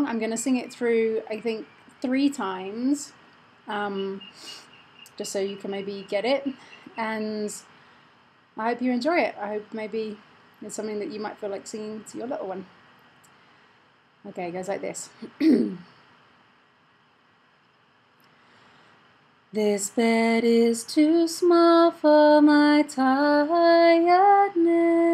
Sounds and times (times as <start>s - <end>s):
Speech: 0.0s - 4.2s, 5.1s - 7.6s, 8.6s - 12.7s, 14.3s - 15.8s.